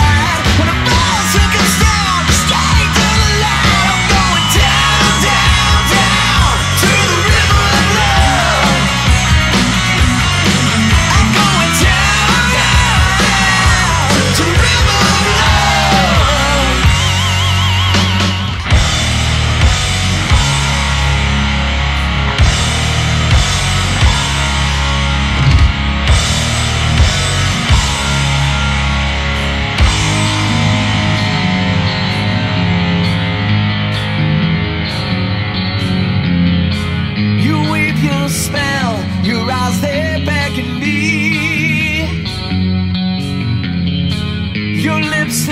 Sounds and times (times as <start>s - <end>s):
Singing: 0.0s - 9.0s, 11.1s - 17.2s
Heavy metal: 0.0s - 45.5s
Progressive rock: 0.0s - 45.5s.